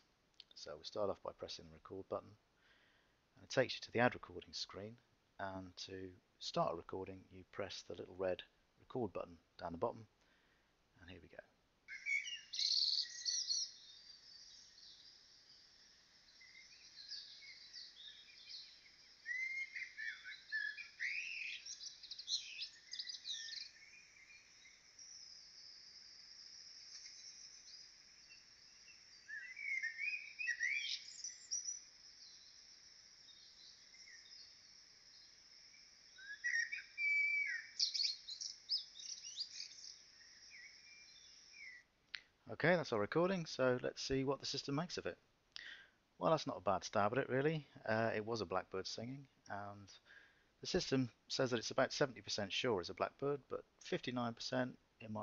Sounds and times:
Chirp, tweet: 11.9 - 41.9.

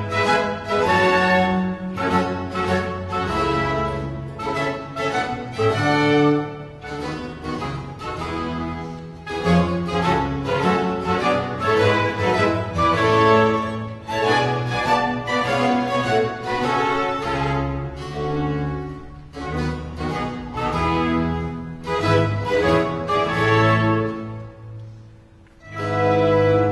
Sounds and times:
String section: 0.0 - 26.7.

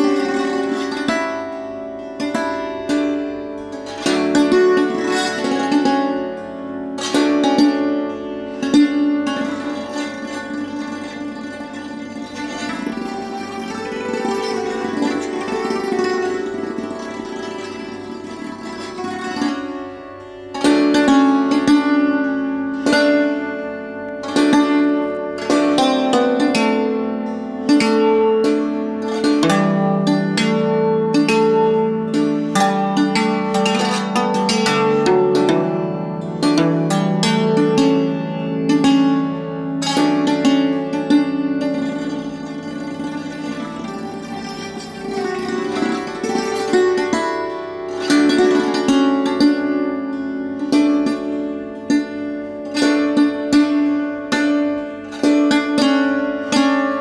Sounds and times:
Bowed string instrument: 0.0 - 57.0.

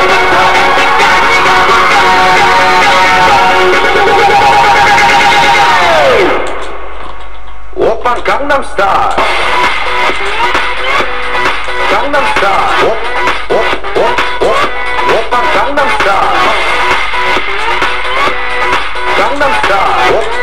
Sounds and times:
Music: 0.0 - 7.0, 9.0 - 20.4.

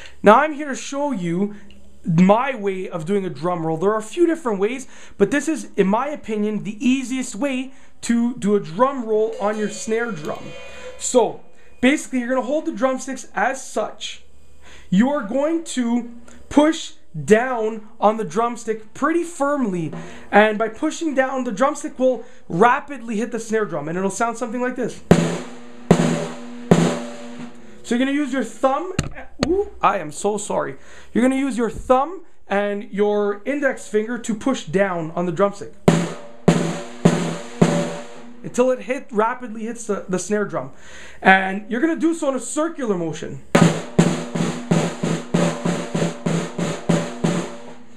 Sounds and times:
Snare drum: 25.1 - 27.6, 35.9 - 38.4, 43.6 - 47.8.

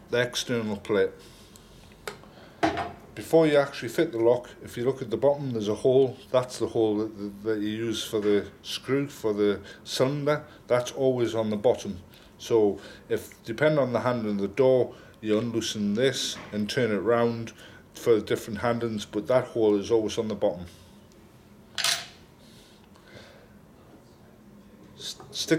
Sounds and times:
Speech: 0.1 - 1.2, 3.2 - 20.7, 25.0 - 25.5.

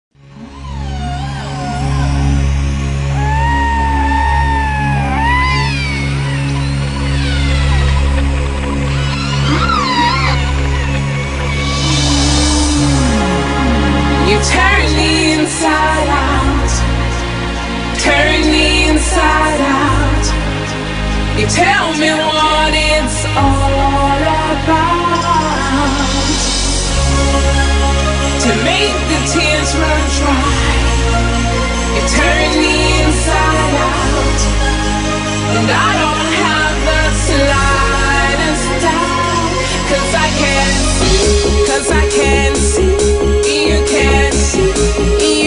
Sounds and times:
Music: 0.1 - 45.4.

